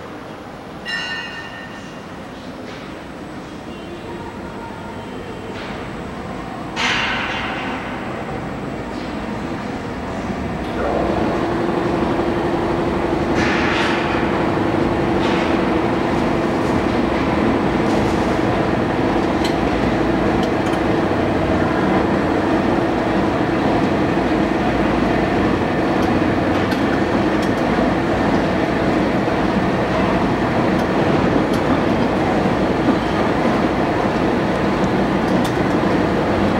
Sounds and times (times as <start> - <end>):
Outside, urban or manmade: 0.0 - 36.5.